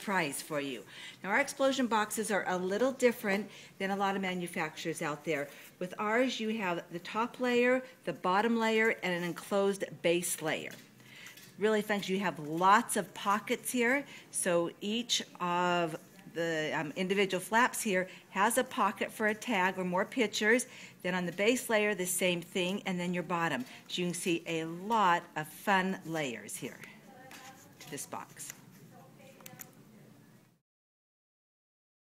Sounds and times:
Speech: 11.6 - 29.8.

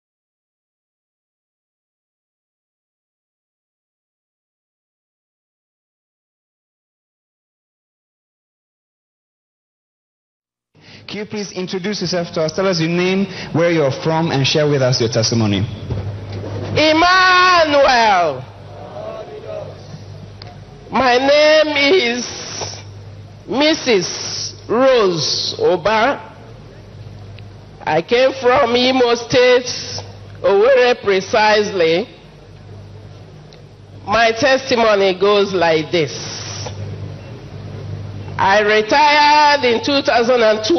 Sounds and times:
Speech: 11.1 - 15.7, 23.5 - 24.1, 24.7 - 26.9, 27.8 - 32.2, 34.1 - 36.3, 38.4 - 40.7.

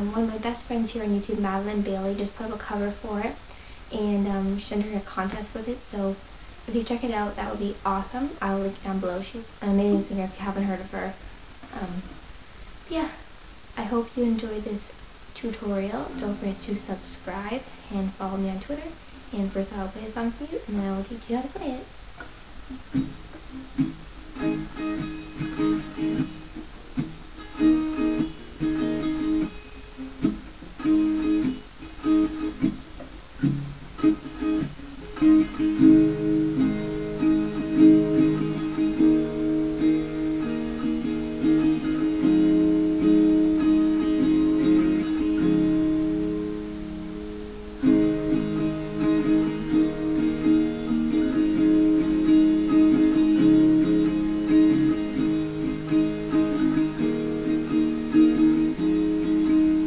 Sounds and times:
Speech: 0.0 - 12.2, 12.9 - 13.2, 13.8 - 21.9
Acoustic guitar: 0.0 - 59.8
Strum: 0.0 - 59.8.

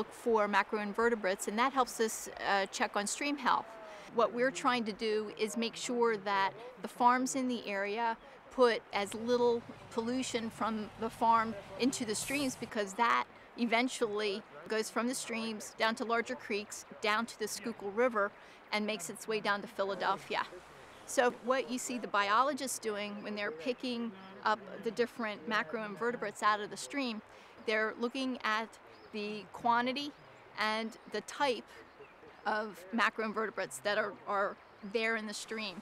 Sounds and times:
Speech: 0.0 - 31.8, 32.4 - 35.8.

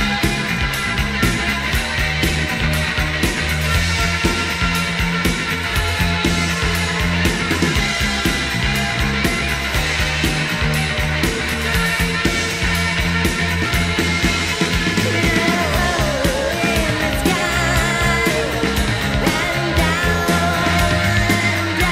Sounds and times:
Music: 0.0 - 21.9.

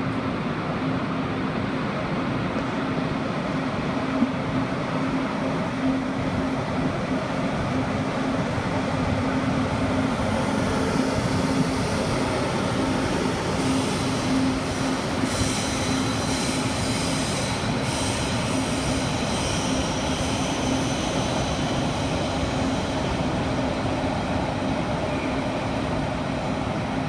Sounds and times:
Railroad car, train wagon: 0.0 - 27.0
Subway, metro, underground: 0.0 - 27.0
Train: 0.0 - 27.0.

